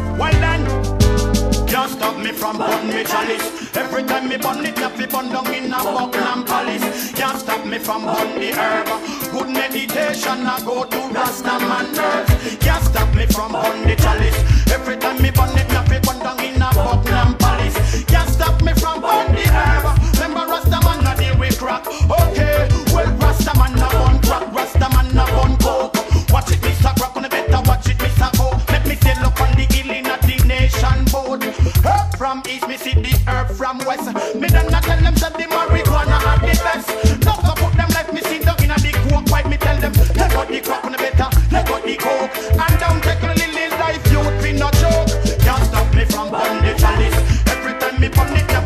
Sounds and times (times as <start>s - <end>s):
Reggae: 0.0s - 48.6s.